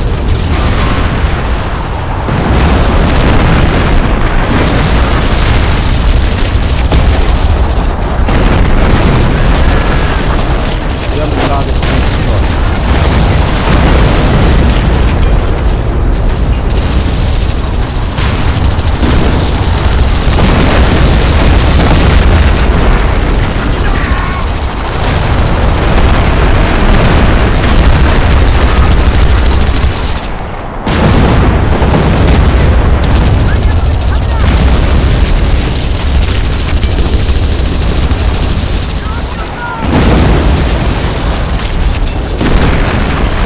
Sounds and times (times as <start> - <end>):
Artillery fire: 0.0 - 43.4.